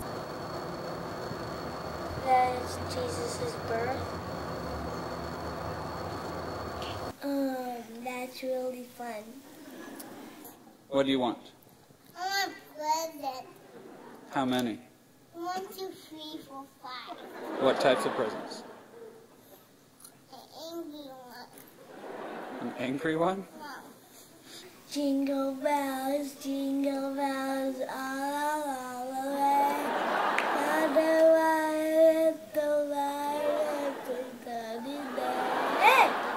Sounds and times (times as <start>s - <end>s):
Child speech, kid speaking: 2.2s - 4.1s, 7.1s - 9.4s, 12.2s - 13.6s, 15.3s - 17.2s, 20.3s - 21.7s, 23.6s - 24.0s, 24.9s - 29.9s, 30.9s - 36.2s.